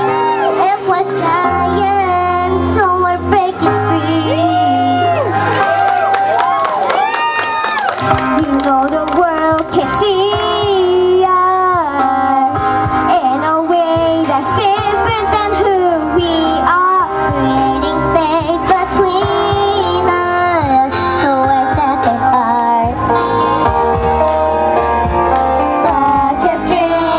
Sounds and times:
Music: 0.0 - 27.1.

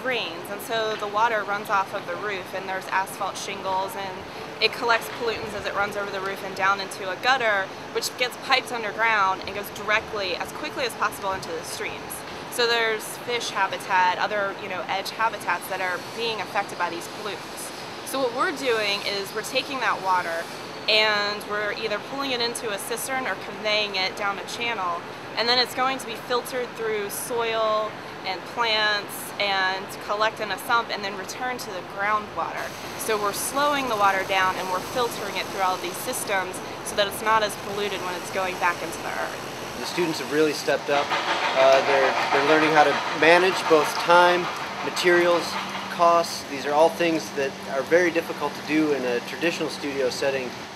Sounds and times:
Speech: 0.0 - 50.5.

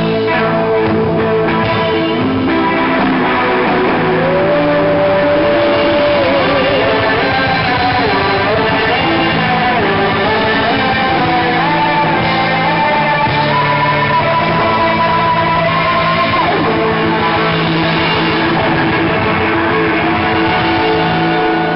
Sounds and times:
Inside, large room or hall: 0.0 - 21.7
Music: 0.0 - 21.7.

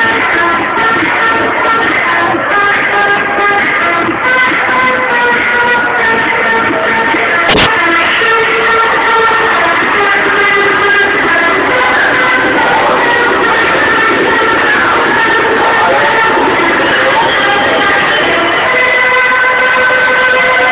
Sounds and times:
Music: 0.0 - 20.7
Speech: 15.6 - 18.7.

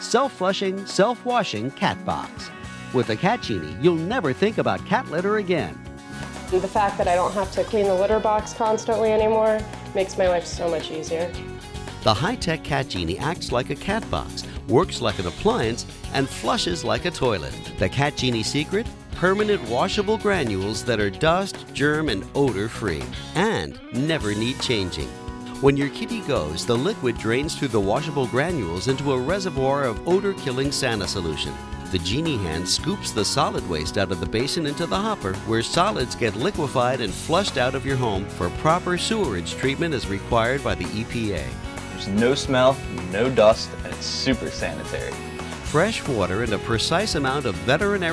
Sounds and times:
Speech: 0.0 - 5.8, 6.5 - 11.4, 12.1 - 48.1
Music: 0.0 - 48.1.

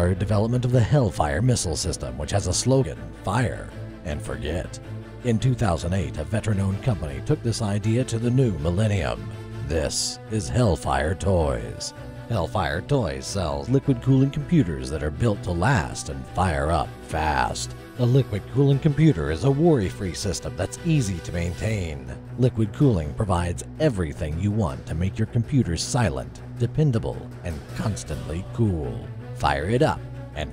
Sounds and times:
Music: 0.0 - 30.5
Speech: 0.0 - 30.5.

